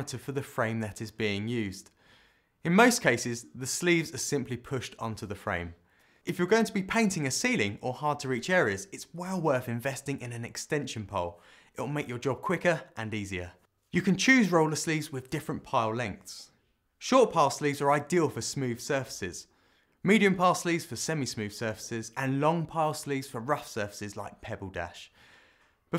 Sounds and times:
Speech: 0:00.0 - 0:02.0, 0:02.6 - 0:25.2.

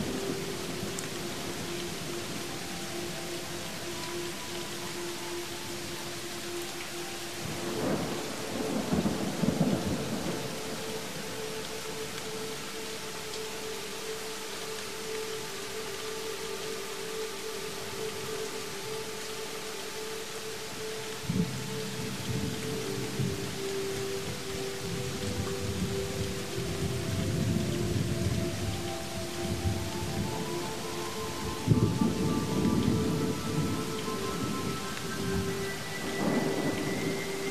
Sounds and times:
Rain: 0:00.0 - 0:37.5.

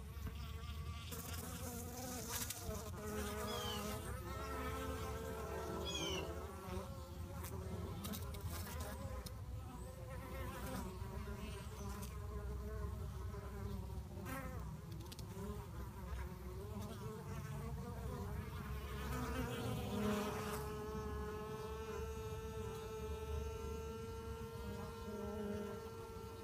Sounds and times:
Bee, wasp, etc.: 0:00.0 - 0:26.4
Fly, housefly: 0:00.0 - 0:26.4.

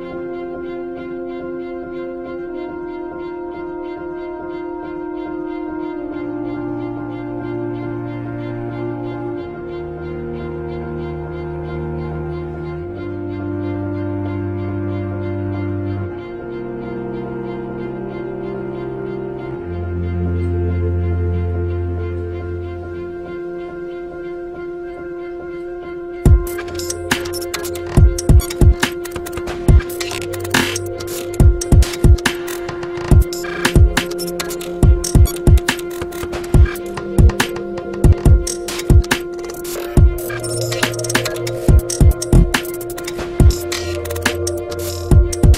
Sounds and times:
Cello: 0:00.0 - 0:45.5.

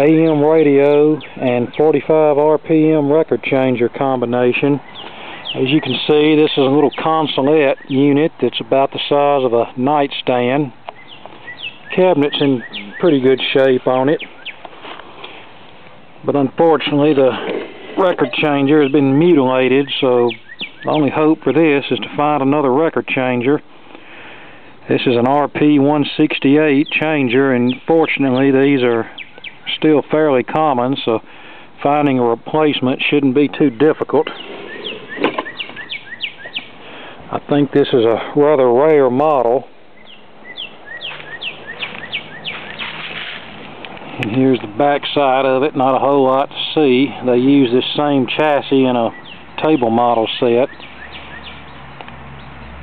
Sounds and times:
Speech: 0:00.0 - 0:04.8, 0:05.6 - 0:10.8, 0:11.9 - 0:14.3, 0:16.2 - 0:23.6, 0:24.8 - 0:29.1, 0:29.7 - 0:31.2, 0:31.8 - 0:34.4, 0:37.3 - 0:39.7, 0:44.2 - 0:50.7.

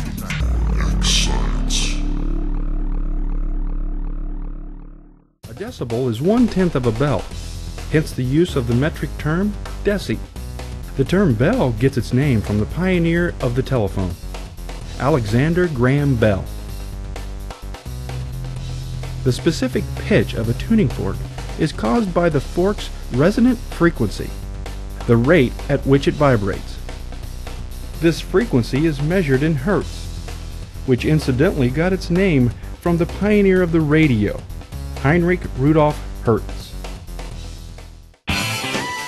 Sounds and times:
Speech: 0:00.0 - 0:02.0, 0:05.4 - 0:07.3, 0:07.9 - 0:10.2, 0:11.0 - 0:14.2, 0:15.0 - 0:16.5, 0:19.2 - 0:24.4, 0:25.0 - 0:26.8, 0:28.0 - 0:30.0, 0:30.9 - 0:34.4, 0:35.0 - 0:36.8
Music: 0:00.0 - 0:39.0.

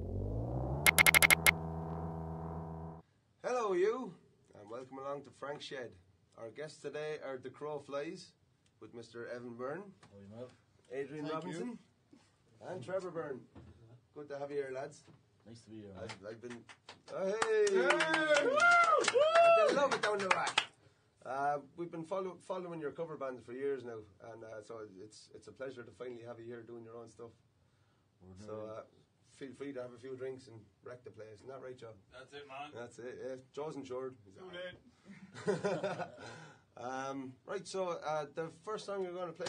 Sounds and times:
Speech: 0:03.4 - 0:11.9, 0:12.6 - 0:18.5, 0:19.7 - 0:27.4, 0:28.2 - 0:34.8, 0:36.8 - 0:39.4.

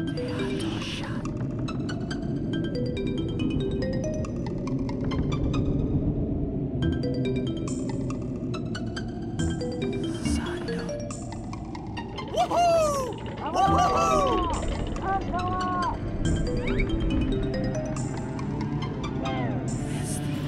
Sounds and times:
Music: 0:00.0 - 0:20.4
Speech: 0:00.2 - 0:01.3, 0:12.4 - 0:16.0.

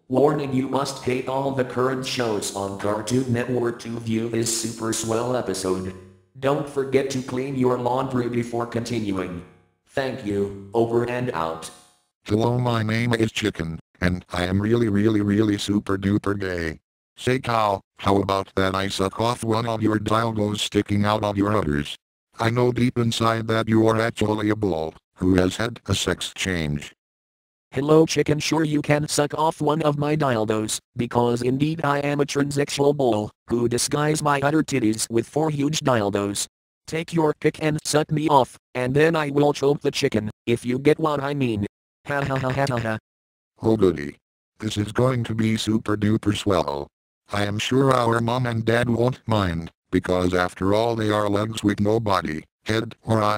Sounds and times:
Speech: 0:00.0 - 0:27.0, 0:27.8 - 0:43.0, 0:43.6 - 0:53.3.

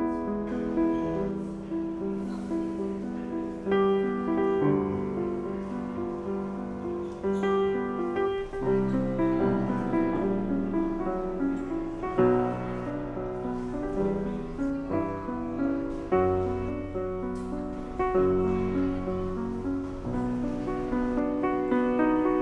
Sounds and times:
Music: 0:00.0 - 0:22.4.

